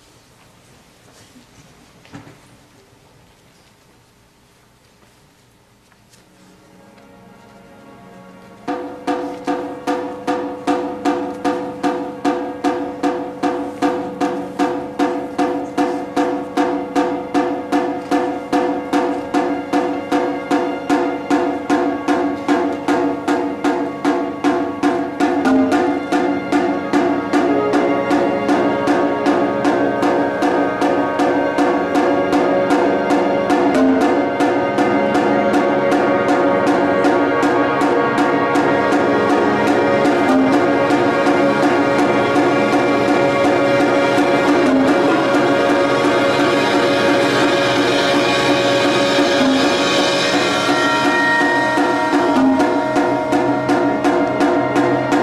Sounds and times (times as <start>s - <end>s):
Orchestra: 4.8s - 55.2s
Percussion: 8.6s - 55.2s.